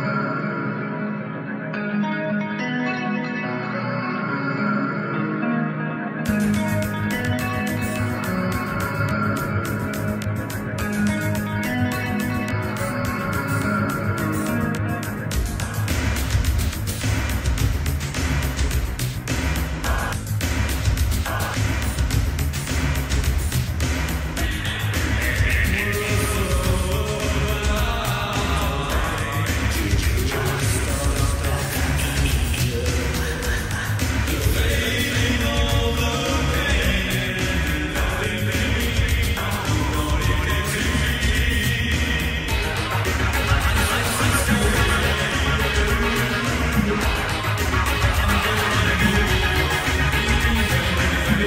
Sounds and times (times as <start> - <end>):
Funk: 6.3 - 51.4
Middle Eastern music: 24.4 - 51.4.